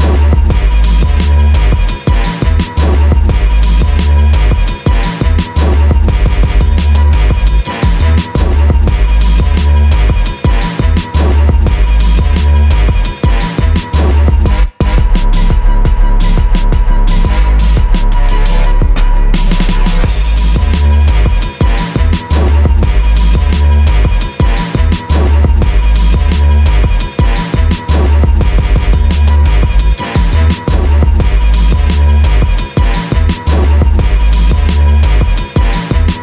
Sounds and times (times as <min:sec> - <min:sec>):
Music: 0:00.0 - 0:36.2.